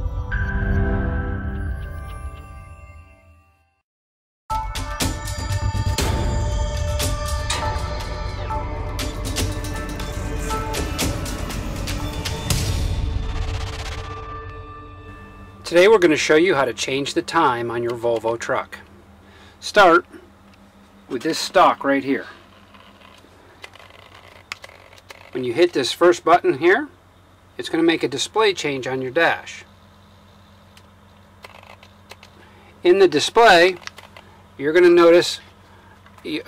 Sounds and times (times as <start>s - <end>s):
Speech: 15.7s - 18.9s, 19.6s - 20.1s, 21.1s - 22.4s, 25.3s - 27.0s, 27.6s - 29.7s, 32.8s - 33.8s, 34.6s - 35.5s, 36.2s - 36.4s.